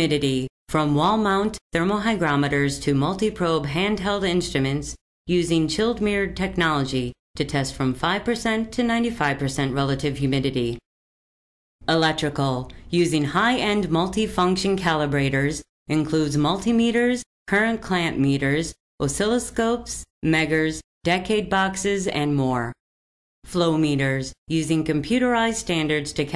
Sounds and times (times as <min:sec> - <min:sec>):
Speech synthesizer: 0:00.0 - 0:10.8, 0:11.9 - 0:22.8, 0:23.5 - 0:26.3.